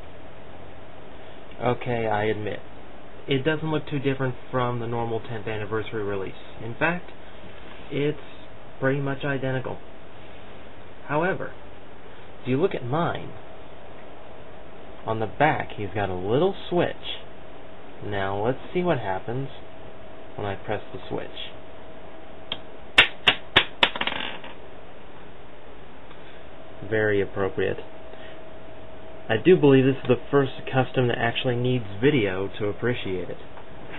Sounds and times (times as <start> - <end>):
Speech: 1.6 - 2.7, 3.3 - 7.1, 7.9 - 9.8, 11.0 - 11.6, 12.4 - 13.4, 15.0 - 17.3, 18.0 - 19.7, 20.4 - 21.6, 26.8 - 27.9, 29.3 - 33.5.